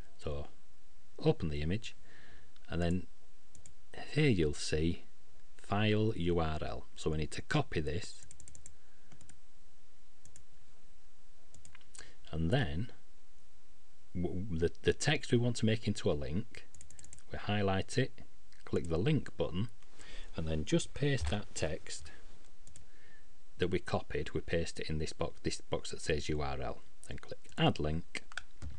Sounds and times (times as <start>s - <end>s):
Speech: 0.2s - 0.6s, 1.2s - 2.0s, 2.7s - 3.1s, 3.9s - 8.2s, 12.3s - 13.0s, 14.2s - 16.7s, 17.3s - 19.8s, 20.4s - 22.2s, 23.6s - 28.4s.